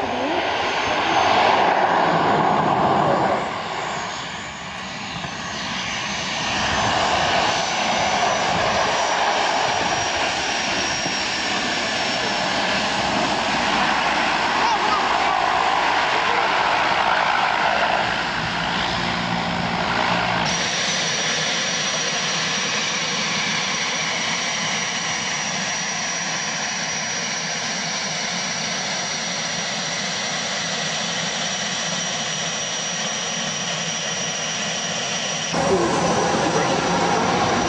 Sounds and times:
Aircraft: 0.0s - 37.6s
Outside, rural or natural: 0.0s - 37.6s.

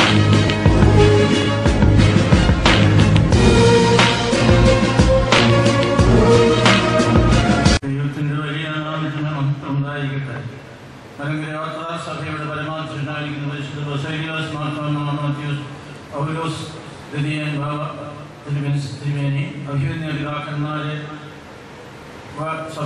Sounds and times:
Male speech, man speaking: 7.8s - 10.6s, 11.2s - 21.3s, 22.4s - 22.8s
Narration, monologue: 7.8s - 22.8s.

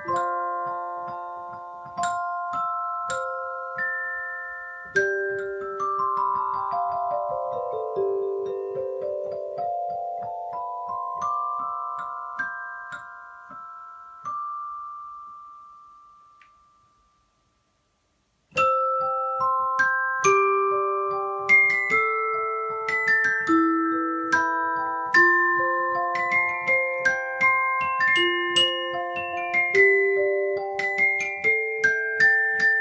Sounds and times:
Piano: 0.0s - 16.9s, 18.5s - 32.8s.

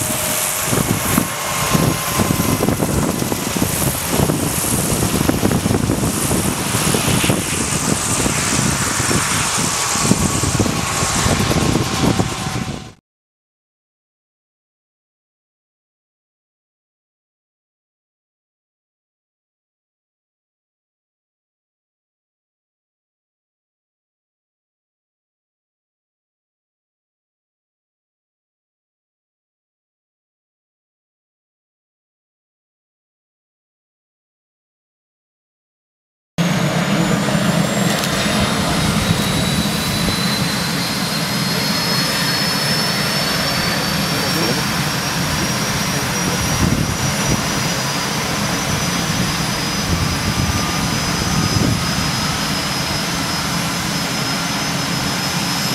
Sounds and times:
Aircraft engine: 0.0s - 13.0s, 36.4s - 55.7s
Helicopter: 0.0s - 13.0s, 36.4s - 55.7s
Outside, rural or natural: 0.0s - 13.0s, 36.4s - 55.7s
Speech: 36.8s - 37.4s, 41.4s - 48.7s.

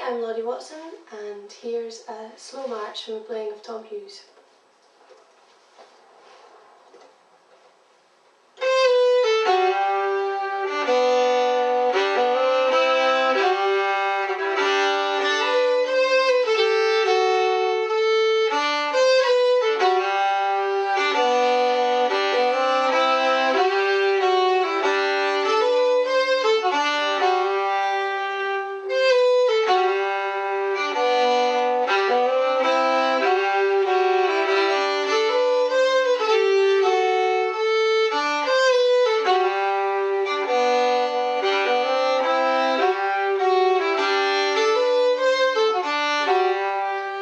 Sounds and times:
Violin, fiddle: 8.6s - 47.2s.

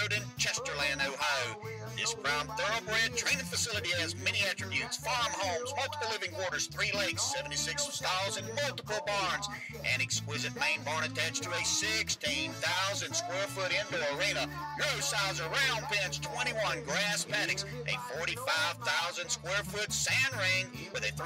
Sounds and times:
Speech: 0.0s - 21.2s.

